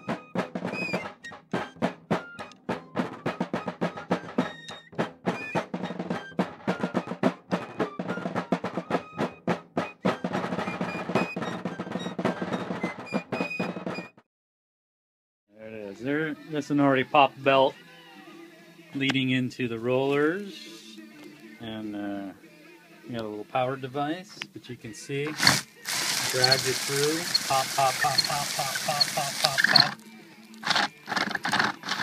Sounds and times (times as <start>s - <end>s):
Speech: 15.5s - 17.8s, 19.0s - 21.0s, 21.6s - 22.4s, 23.1s - 25.4s, 26.2s - 30.0s.